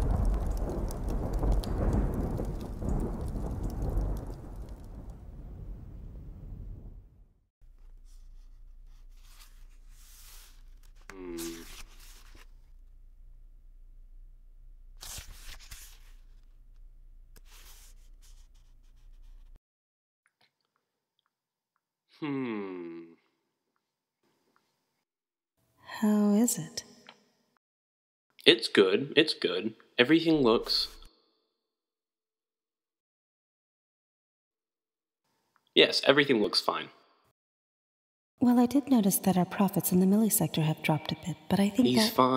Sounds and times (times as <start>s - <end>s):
Speech: 25.9s - 26.8s, 28.4s - 31.0s, 35.8s - 36.9s, 38.4s - 42.3s.